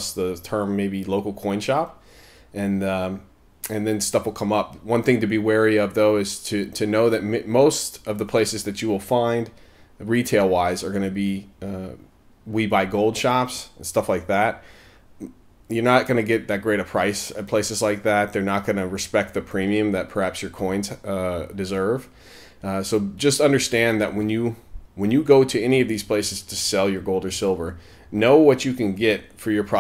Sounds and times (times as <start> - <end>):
Speech: 0.0 - 2.0, 2.6 - 14.6, 15.2 - 29.8.